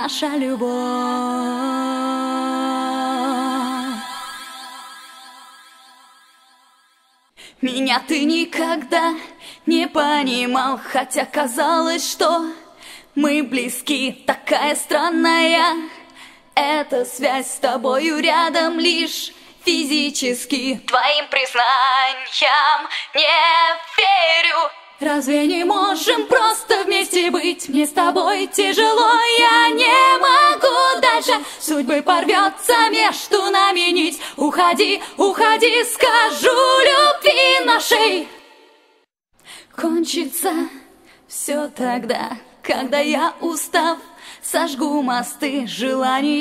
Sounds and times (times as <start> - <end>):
A capella: 0.0 - 6.0, 7.4 - 46.4.